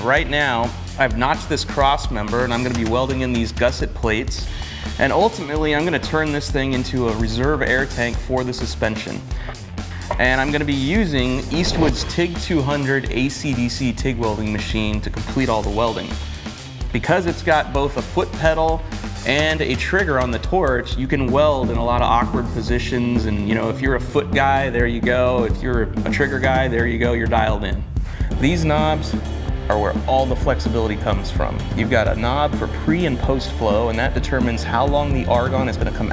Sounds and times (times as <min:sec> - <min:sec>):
Speech: 0:00.0 - 0:09.3, 0:10.1 - 0:16.2, 0:16.9 - 0:36.1
Music: 0:00.0 - 0:36.1.